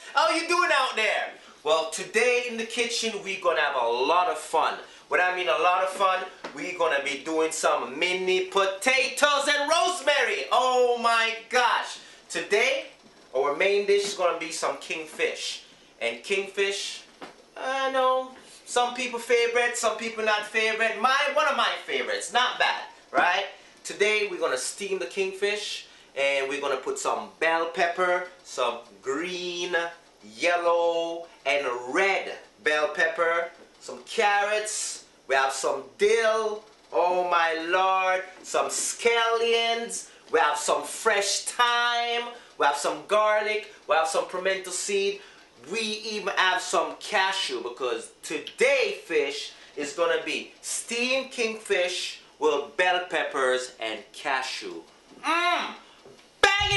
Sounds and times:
Speech: 0.0s - 56.7s.

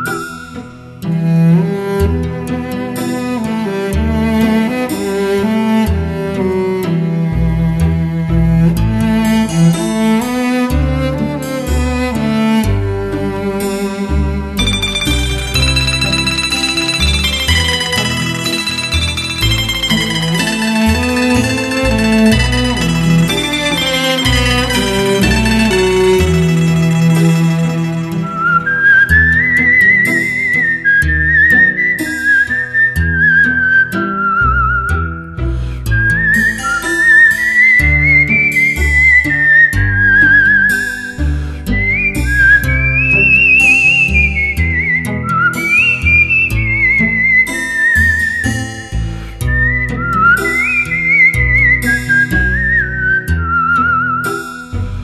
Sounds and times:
Music: 0.0s - 55.0s.

